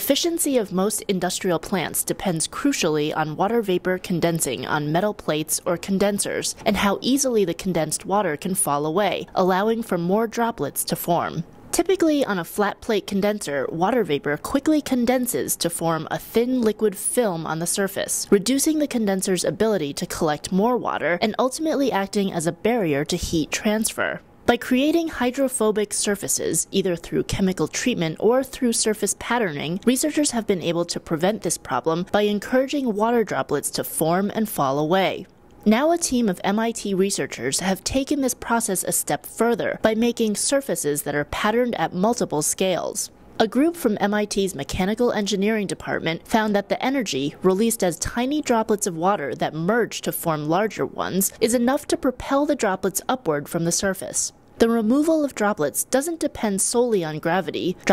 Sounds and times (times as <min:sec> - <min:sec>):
Speech: 0:00.0 - 0:57.9.